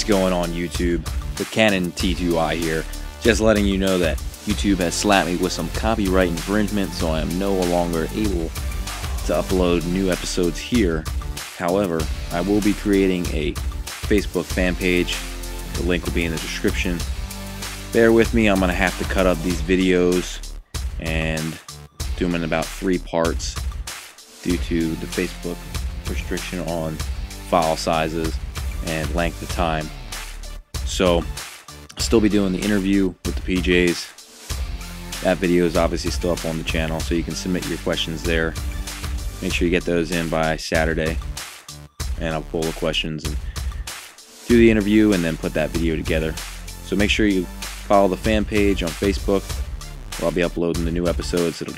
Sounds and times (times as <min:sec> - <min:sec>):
Speech: 0:00.0 - 0:08.6, 0:09.2 - 0:17.1, 0:17.9 - 0:23.6, 0:24.4 - 0:30.0, 0:30.8 - 0:34.1, 0:35.2 - 0:38.6, 0:39.4 - 0:41.2, 0:42.2 - 0:43.5, 0:44.5 - 0:49.6, 0:50.2 - 0:51.7
Music: 0:00.0 - 0:51.7.